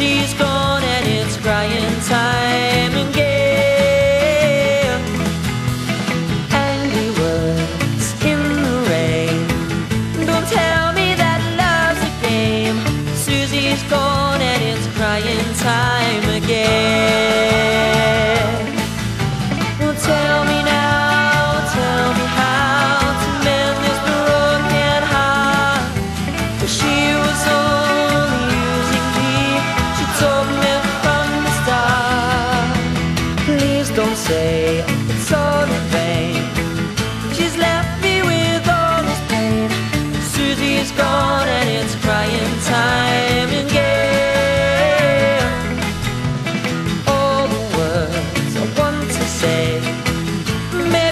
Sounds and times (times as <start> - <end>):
Music: 0.0 - 51.1.